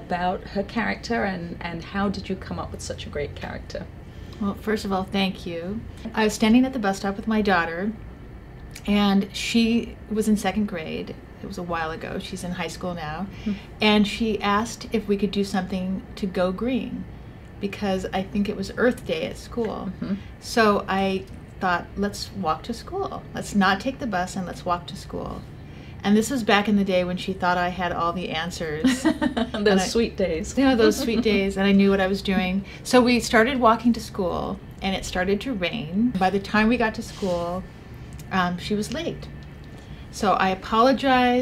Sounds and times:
Speech: 0.0 - 8.0, 17.6 - 25.4, 26.0 - 39.3, 40.2 - 41.4.

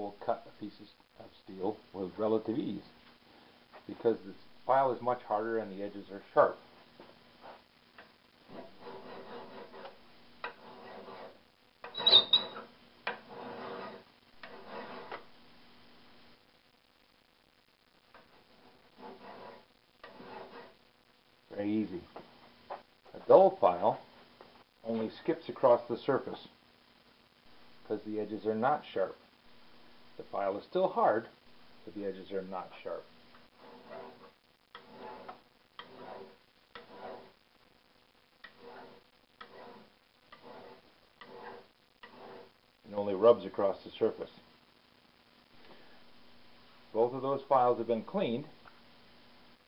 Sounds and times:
Filing (rasp): 8.5 - 11.4, 12.0 - 15.2, 18.2 - 20.8, 33.6 - 37.4, 38.4 - 42.6
Rub: 8.5 - 11.4, 12.0 - 15.2, 18.2 - 20.8, 32.9 - 37.4, 38.4 - 42.6.

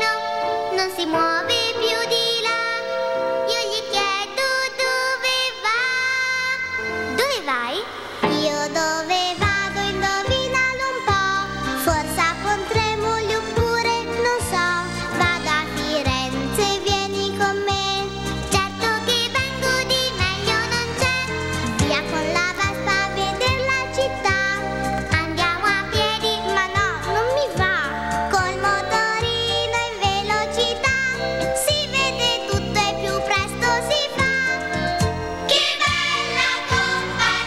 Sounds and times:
Music: 0.0 - 37.4.

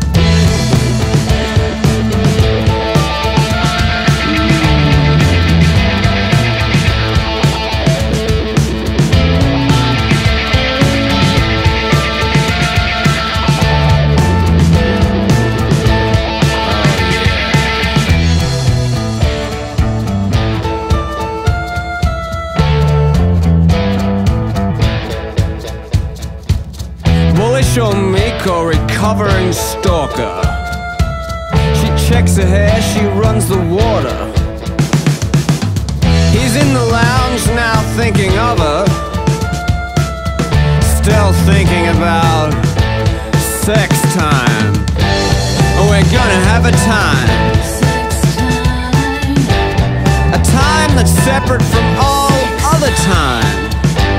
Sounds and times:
Grunge: 0.0 - 54.1.

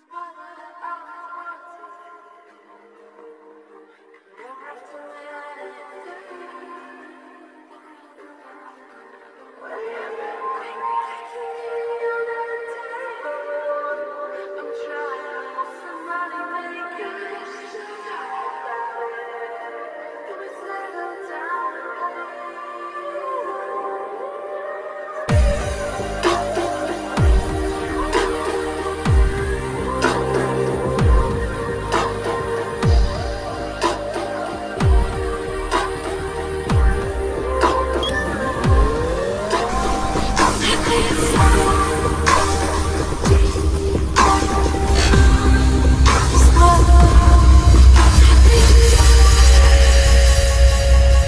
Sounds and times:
Dubstep: 25.3 - 51.2.

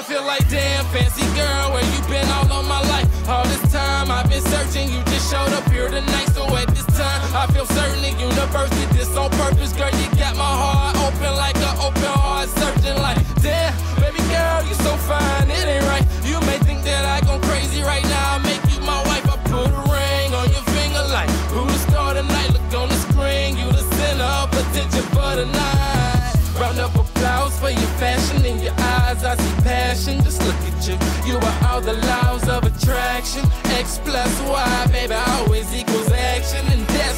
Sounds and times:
Music: 0.0 - 37.1.

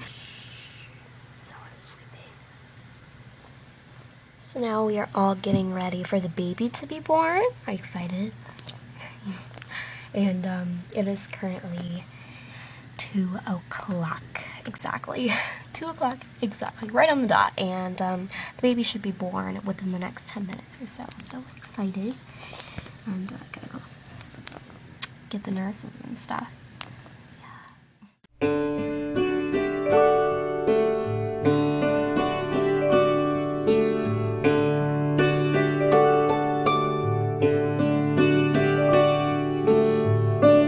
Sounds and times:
Inside, small room: 0.0 - 40.6
Speech: 4.4 - 8.4, 10.2 - 12.1, 13.0 - 22.2, 23.1 - 23.9, 25.3 - 26.5.

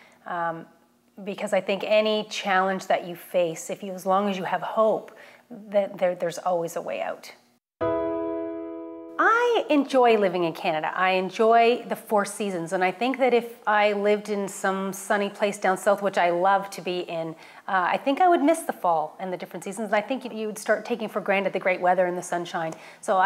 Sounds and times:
Female speech, woman speaking: 0.3 - 7.4, 9.2 - 23.2
Music: 7.8 - 9.3.

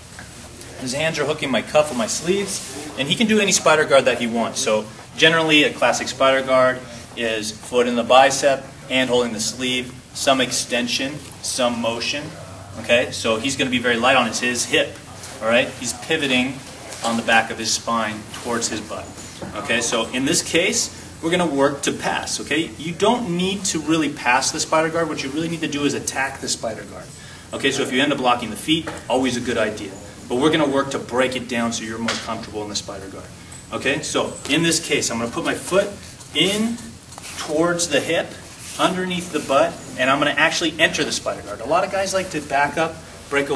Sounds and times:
Speech: 0.6 - 43.5.

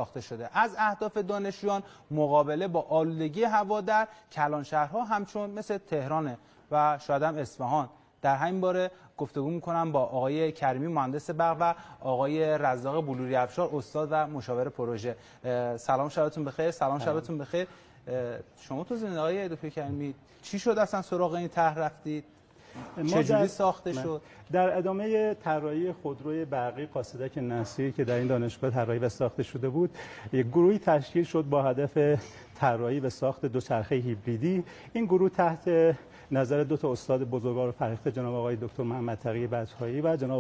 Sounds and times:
Speech: 0.0 - 40.4.

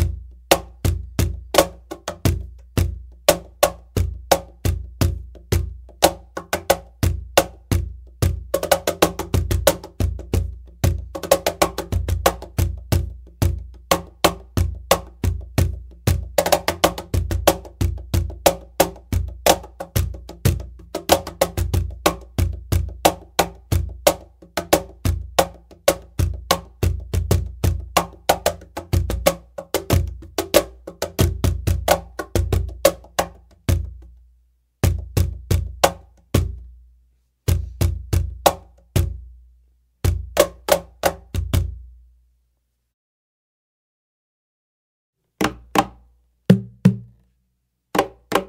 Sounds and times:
Wood block: 0.0 - 34.1, 45.4 - 47.2, 48.0 - 48.4.

